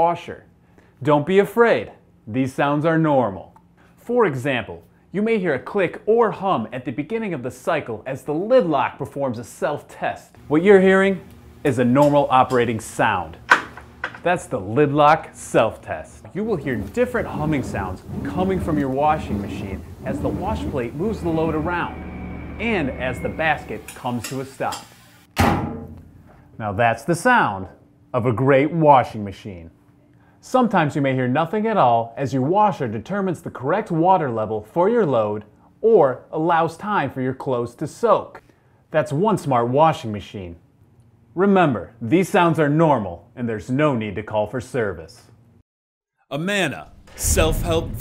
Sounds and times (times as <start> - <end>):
Speech: 0.0 - 13.4, 14.2 - 21.9, 22.6 - 24.9, 26.6 - 29.8, 30.4 - 40.6, 41.4 - 45.4, 46.3 - 48.0.